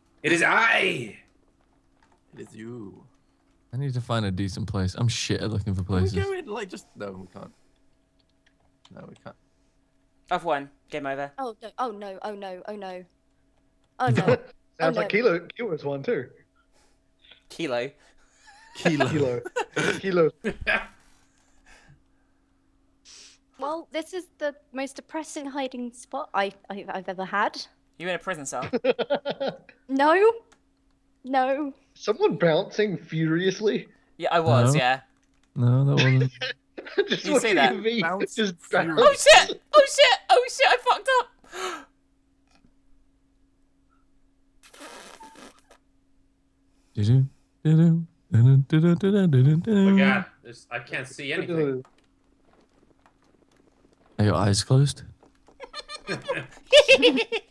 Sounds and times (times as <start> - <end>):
Speech: 3.8 - 7.5, 14.0 - 16.3, 18.8 - 20.4, 32.0 - 35.0, 35.6 - 36.5, 37.1 - 41.2, 47.0 - 51.8, 54.2 - 55.1.